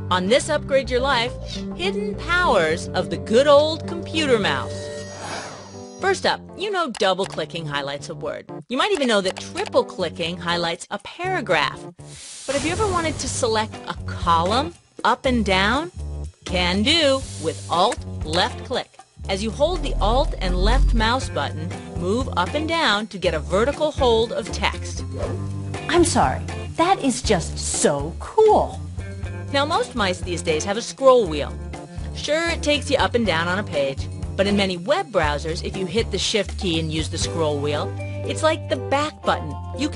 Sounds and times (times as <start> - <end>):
Music: 0.0 - 39.9
Speech: 0.1 - 4.8, 6.0 - 11.8, 12.5 - 25.0, 25.9 - 28.8, 29.5 - 31.6, 32.2 - 39.9.